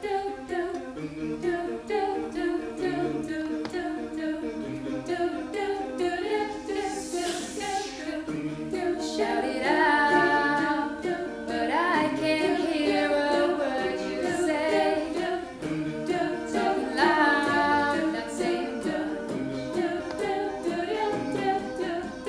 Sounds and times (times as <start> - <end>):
A capella: 0.0 - 22.2.